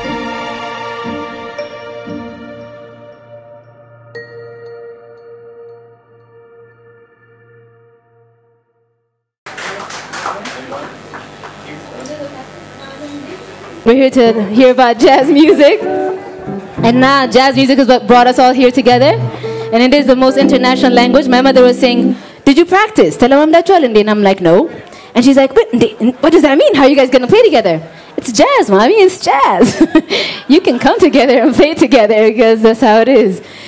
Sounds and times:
Speech: 11.6 - 15.8, 30.5 - 33.4.

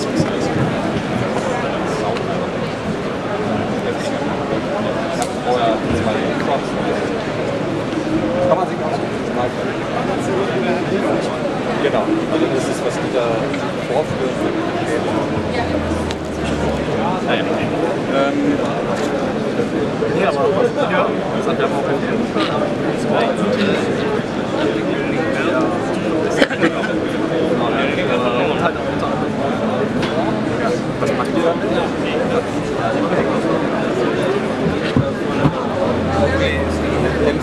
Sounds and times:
Speech: 0.0 - 37.4.

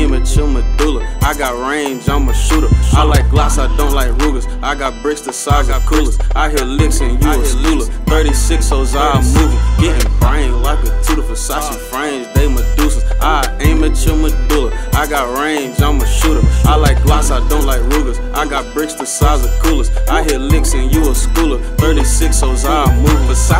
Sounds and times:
Music: 0.0 - 23.6.

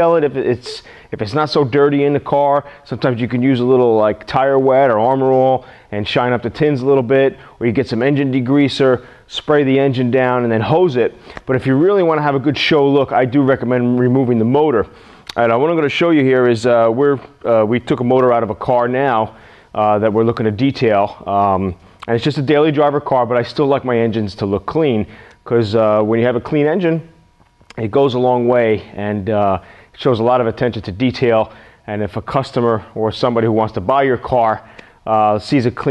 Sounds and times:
Speech: 0.0 - 27.1, 27.7 - 35.9.

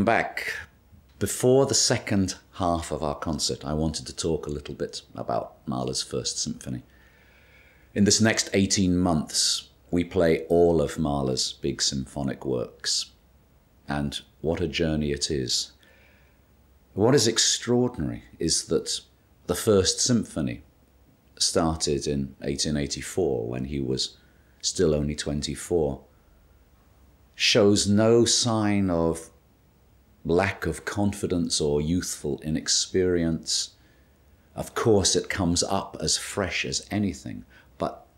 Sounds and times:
Speech: 0.0 - 6.9, 8.0 - 13.2, 13.9 - 15.8, 17.0 - 20.7, 21.4 - 26.1, 27.4 - 29.4, 30.2 - 33.8, 34.6 - 38.1.

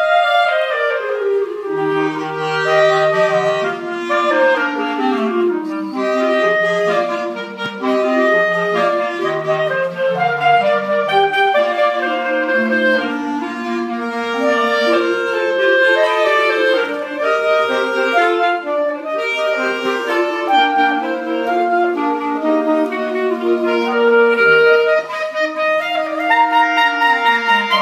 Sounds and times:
Clarinet: 0.0 - 27.8.

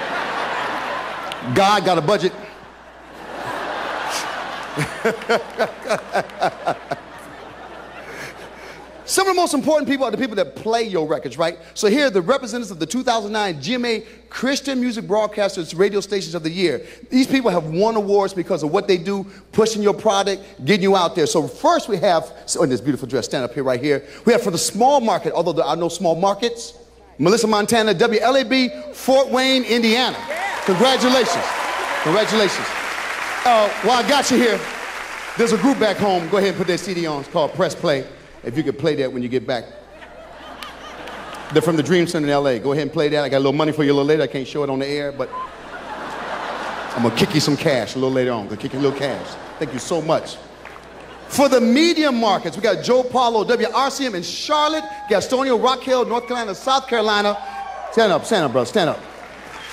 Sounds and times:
Speech: 1.4 - 2.4, 9.1 - 31.5, 33.5 - 34.6, 35.4 - 39.7, 41.5 - 45.3, 46.9 - 50.4, 51.3 - 57.4, 58.0 - 59.0.

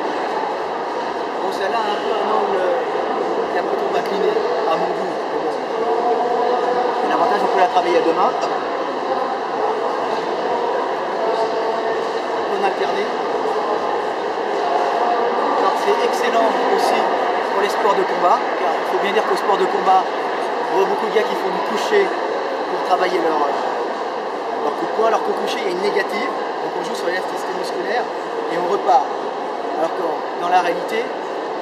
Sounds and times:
Speech: 1.4 - 2.9, 3.5 - 9.8, 11.2 - 13.2, 15.0 - 20.1, 20.7 - 23.7, 24.6 - 29.1, 29.8 - 31.1.

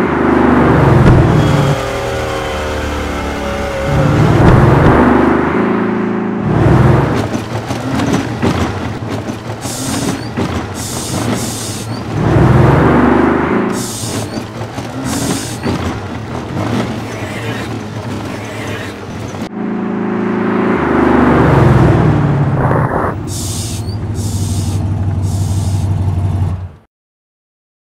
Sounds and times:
Air brake: 23.3 - 25.9.

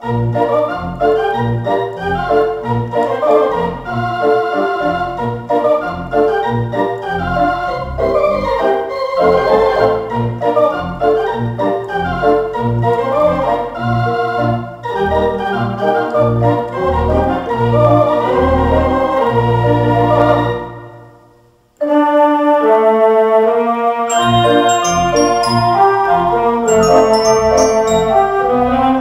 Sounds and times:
Music: 0.0 - 29.0.

